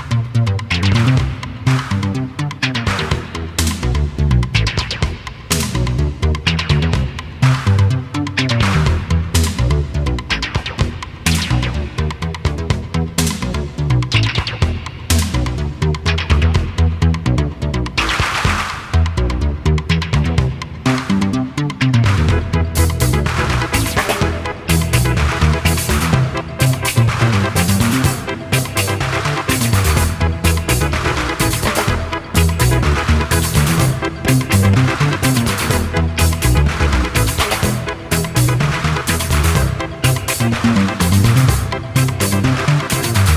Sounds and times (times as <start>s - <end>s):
Music: 0.0s - 43.3s.